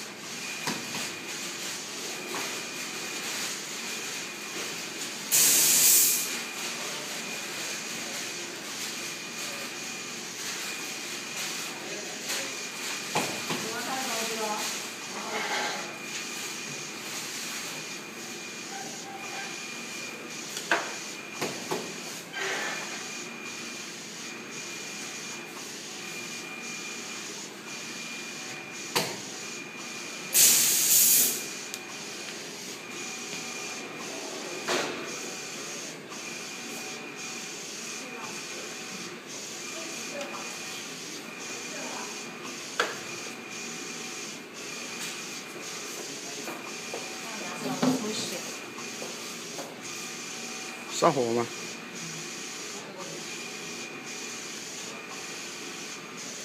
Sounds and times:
Printer: 0.0 - 56.4.

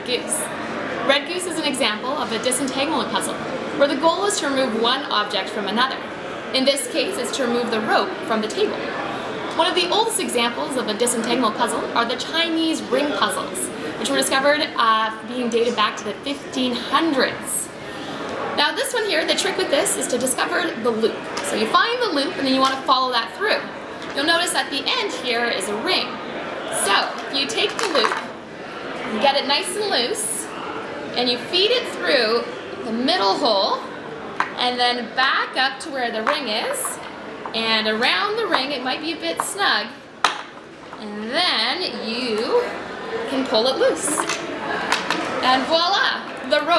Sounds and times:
Speech: 0.0 - 17.7, 18.6 - 28.3, 29.1 - 30.6, 31.2 - 33.9, 34.6 - 40.0, 41.0 - 44.4, 45.4 - 46.7.

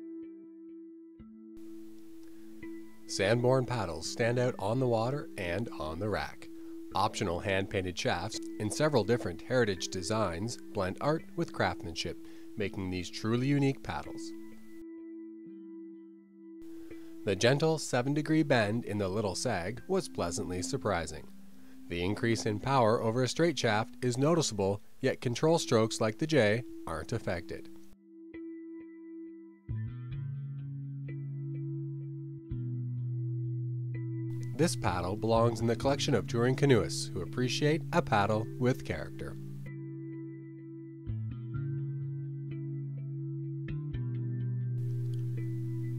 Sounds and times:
Speech: 3.1 - 14.4, 17.3 - 21.2, 21.9 - 27.7, 34.6 - 39.4.

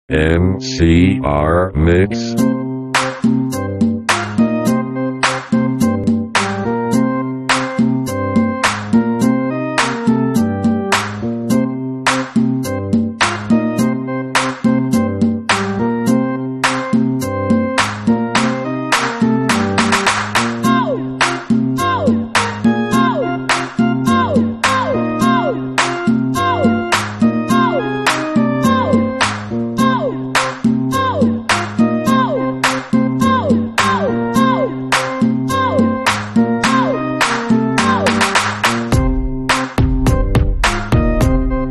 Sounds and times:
Speech: 0.1 - 2.4
Rhythm and blues: 0.1 - 41.7.

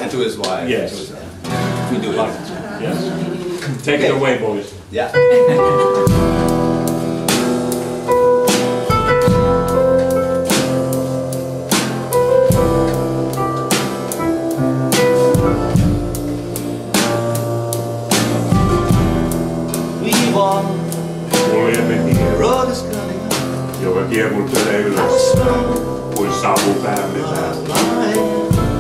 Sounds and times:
Music: 1.4 - 2.0, 5.0 - 28.8.

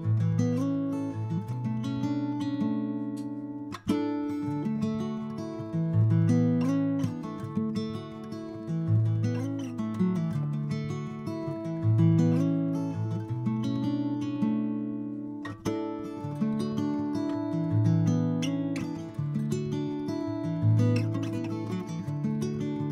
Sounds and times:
Acoustic guitar: 0.0 - 22.9.

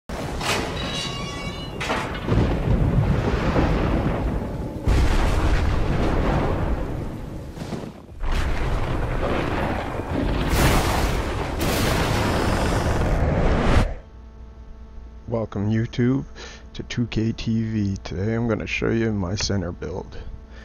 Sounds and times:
Eruption: 0.1 - 14.0.

